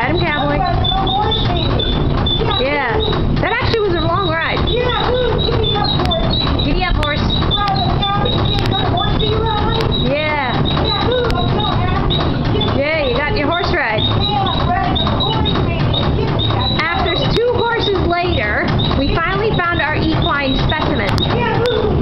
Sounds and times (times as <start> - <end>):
Speech: 0.0 - 22.0.